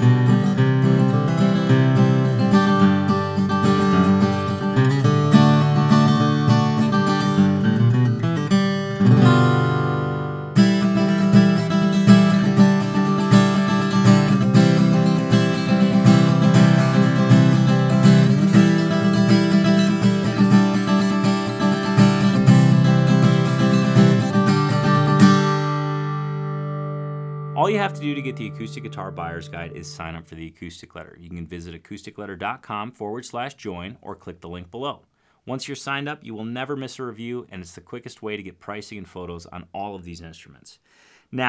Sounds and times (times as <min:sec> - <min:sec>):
Acoustic guitar: 0:00.0 - 0:39.4
Speech: 0:27.6 - 0:41.4.